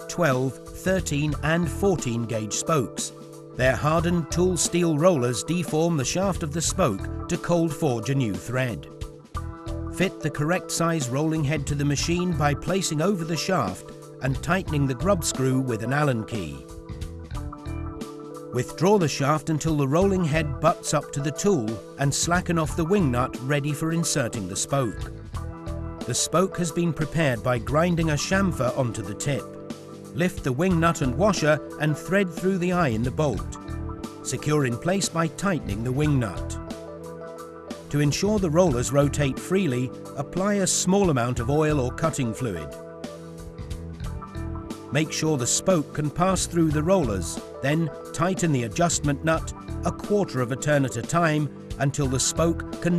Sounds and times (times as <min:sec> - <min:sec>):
Speech: 0:00.0 - 0:08.9, 0:10.0 - 0:16.6, 0:18.6 - 0:25.1, 0:26.1 - 0:29.5, 0:30.2 - 0:33.6, 0:34.2 - 0:36.6, 0:37.9 - 0:42.7, 0:44.9 - 0:52.9
Music: 0:00.0 - 0:52.9.